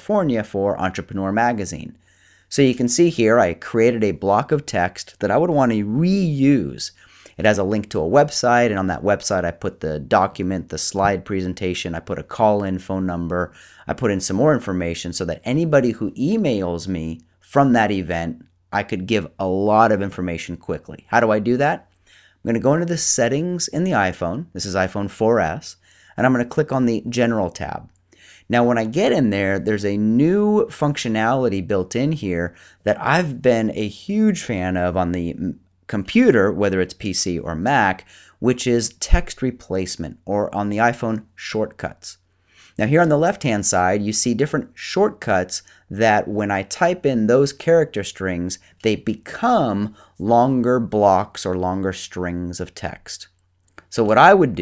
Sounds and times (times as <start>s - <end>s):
Speech: 0.0s - 42.2s, 42.8s - 54.6s.